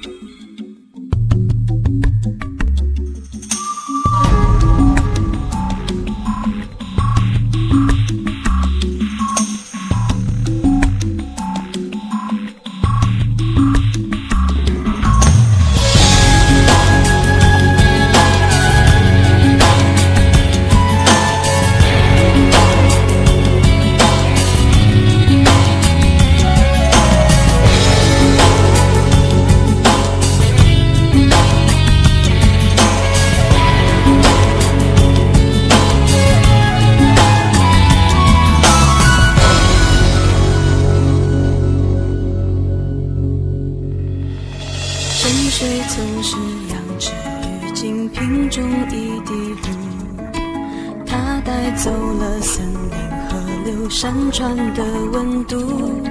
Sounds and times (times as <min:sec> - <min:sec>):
Drum machine: 0:01.2 - 0:41.3.